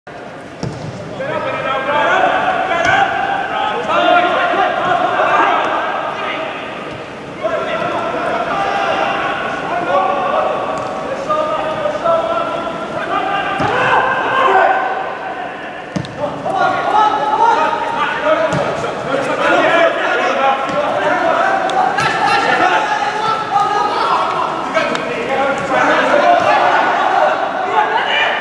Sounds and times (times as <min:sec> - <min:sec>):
Speech: 0:01.2 - 0:06.7, 0:07.4 - 0:28.4.